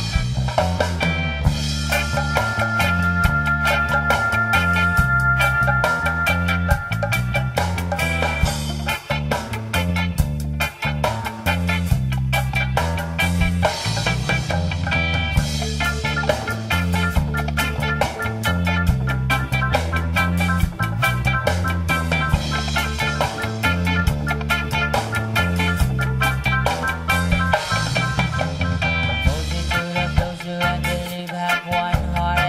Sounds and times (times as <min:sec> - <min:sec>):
Music: 0:00.0 - 0:32.4.